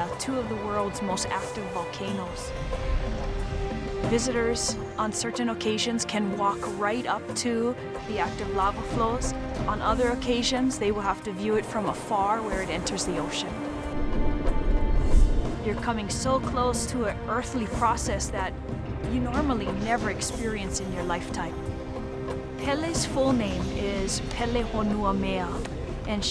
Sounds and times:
Speech: 0.0s - 2.5s, 4.1s - 13.6s, 15.7s - 18.5s, 19.1s - 21.6s, 22.6s - 26.3s
Music: 0.0s - 26.3s.

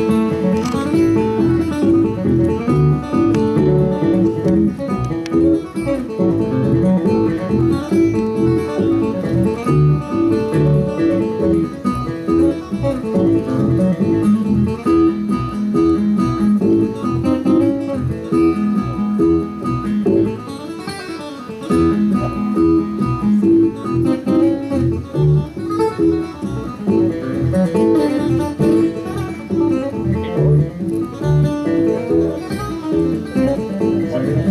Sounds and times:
Acoustic guitar: 0.0s - 34.5s
Strum: 0.0s - 34.5s.

